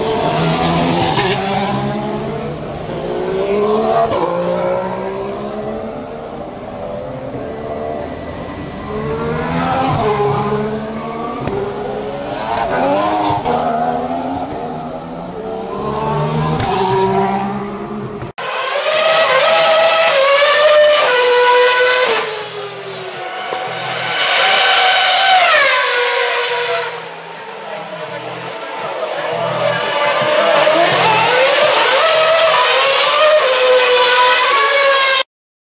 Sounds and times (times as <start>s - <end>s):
Speech: 27.6s - 31.4s.